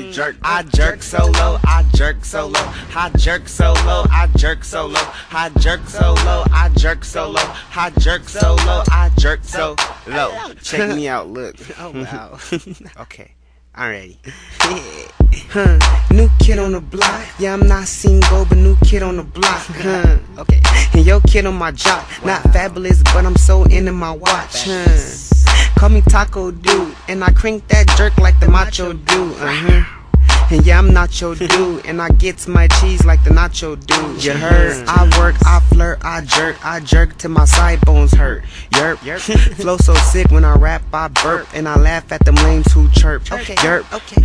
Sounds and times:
Music: 0.0s - 10.4s, 14.4s - 44.2s.

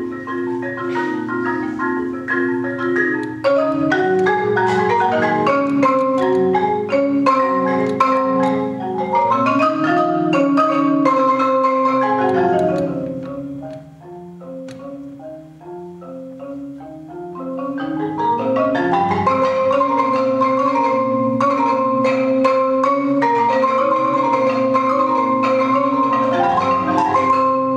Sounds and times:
Marimba, xylophone: 0.0s - 27.7s.

